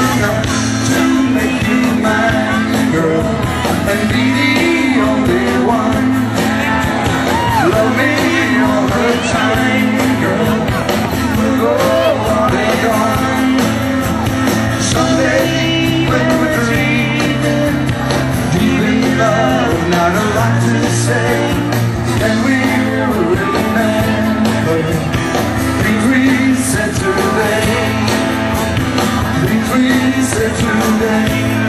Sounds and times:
Inside, large room or hall: 0.0 - 31.6
Music: 0.0 - 31.6
Singing: 0.0 - 31.6.

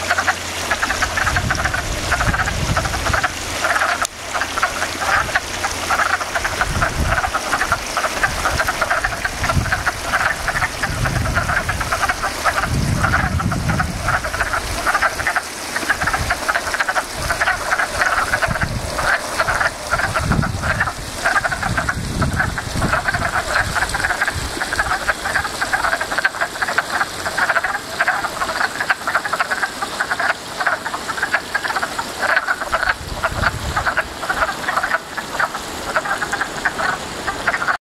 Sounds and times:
Frog: 0.0 - 37.8.

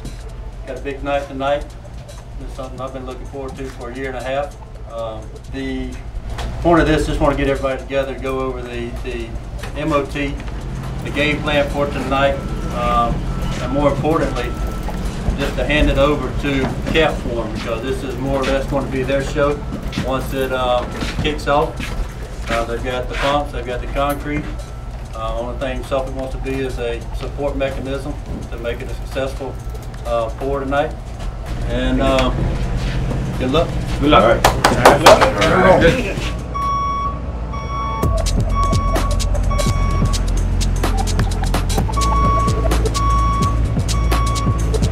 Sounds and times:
Music: 0.0 - 34.2, 37.9 - 44.9.

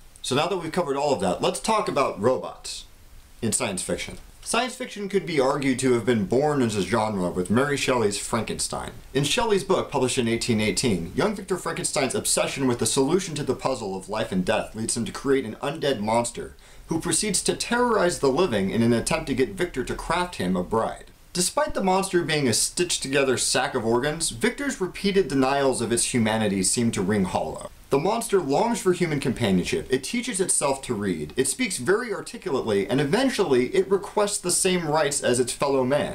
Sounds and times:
Speech: 0.2 - 36.1.

